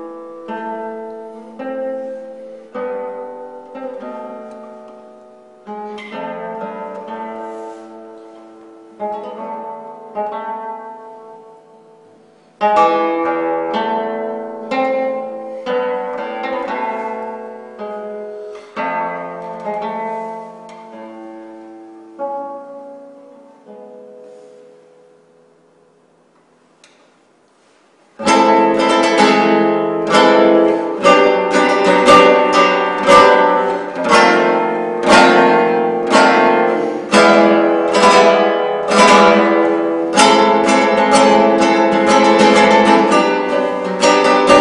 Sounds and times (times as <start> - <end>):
Guitar: 0.0 - 44.6.